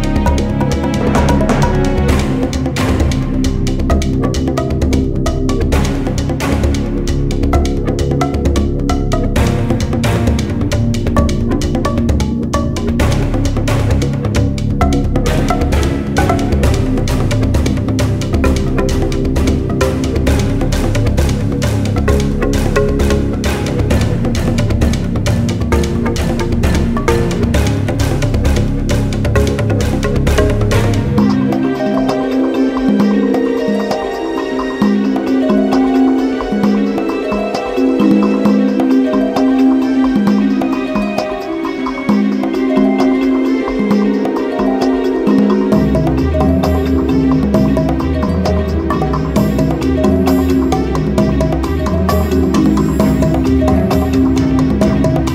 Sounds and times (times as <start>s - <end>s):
Music: 0.0s - 55.3s.